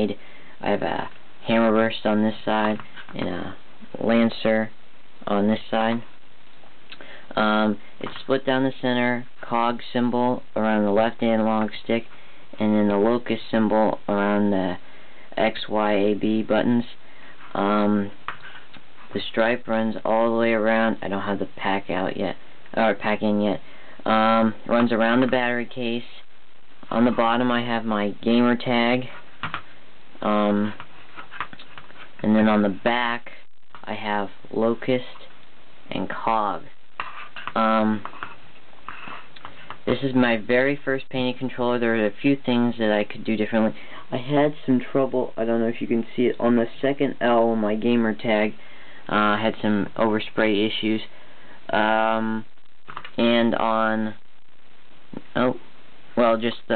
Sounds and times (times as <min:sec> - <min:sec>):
Speech: 0:00.0 - 0:06.1, 0:07.3 - 0:18.2, 0:19.1 - 0:26.3, 0:26.9 - 0:29.2, 0:30.2 - 0:30.8, 0:32.2 - 0:35.3, 0:35.9 - 0:36.8, 0:37.4 - 0:38.3, 0:39.4 - 0:51.1, 0:51.7 - 0:54.2, 0:55.1 - 0:55.6, 0:56.2 - 0:56.7.